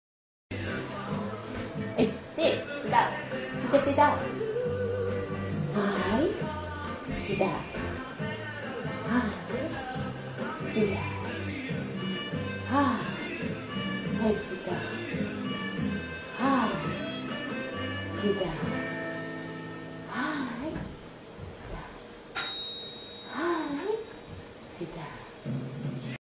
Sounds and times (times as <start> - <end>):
Music: 0.5 - 21.2, 25.4 - 26.2
Speech: 2.0 - 4.3, 7.1 - 7.8, 10.6 - 11.2, 14.2 - 15.0, 18.2 - 18.8, 24.7 - 25.3.